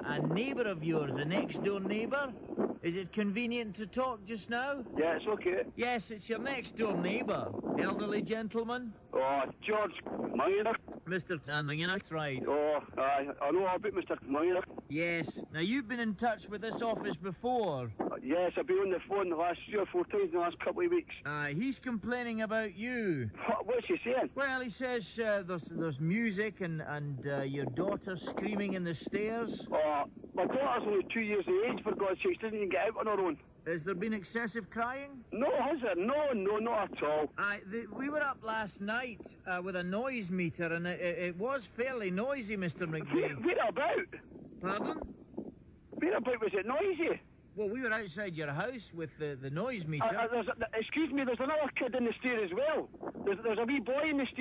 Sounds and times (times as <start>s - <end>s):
Radio: 0.0s - 22.6s, 23.2s - 26.6s, 27.2s - 40.7s, 41.4s - 48.1s, 49.9s - 54.4s
Speech: 0.0s - 45.1s, 46.0s - 54.4s.